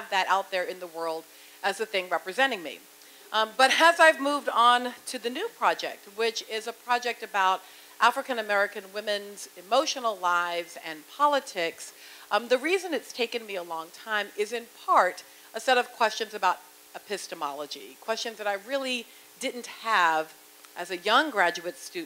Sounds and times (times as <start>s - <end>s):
Speech: 0.0s - 22.0s.